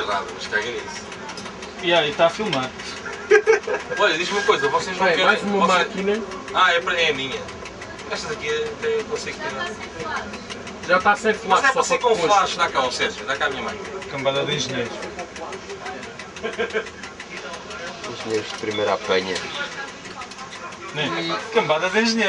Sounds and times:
Speech: 0:04.0 - 0:16.2, 0:17.2 - 0:22.2.

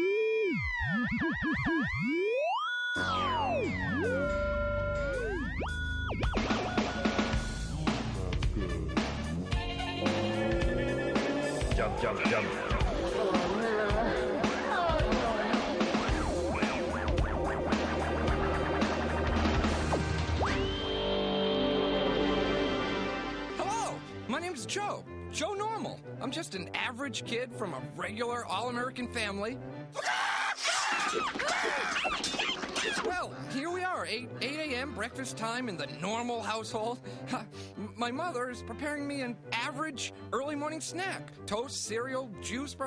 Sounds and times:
Music: 0:00.0 - 0:42.8
Speech: 0:23.6 - 0:29.6, 0:33.1 - 0:42.8.

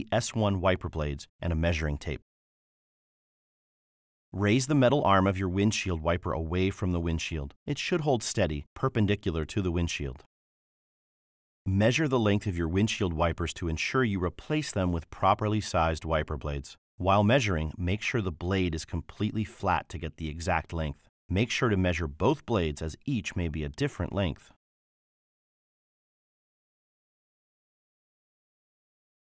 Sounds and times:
Speech: 0:00.0 - 0:02.3, 0:04.4 - 0:10.3, 0:11.7 - 0:24.6.

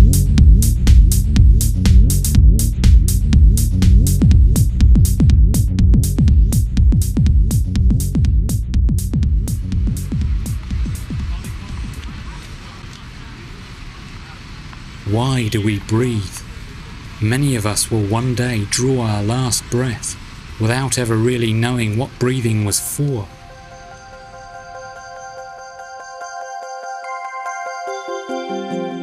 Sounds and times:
Music: 0:00.0 - 0:12.3, 0:22.5 - 0:29.0
Speech: 0:11.1 - 0:23.3.

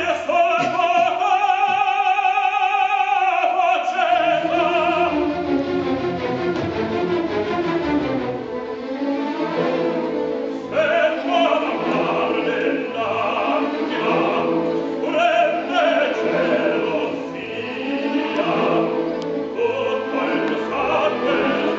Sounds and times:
Opera: 0:00.0 - 0:21.7.

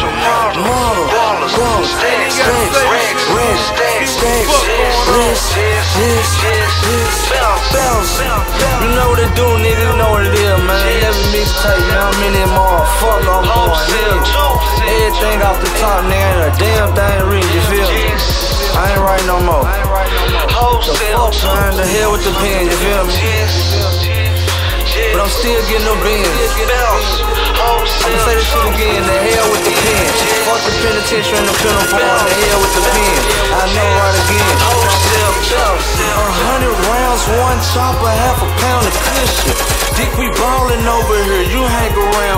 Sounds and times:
Music: 0:00.0 - 0:42.3.

